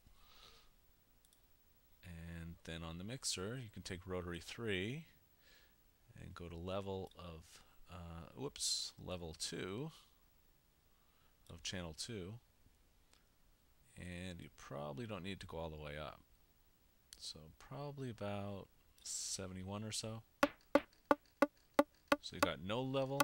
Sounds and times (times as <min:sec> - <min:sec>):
Speech: 0:02.0 - 0:05.2, 0:06.1 - 0:10.0, 0:11.5 - 0:12.4, 0:13.9 - 0:16.3, 0:17.2 - 0:20.3, 0:22.3 - 0:23.2.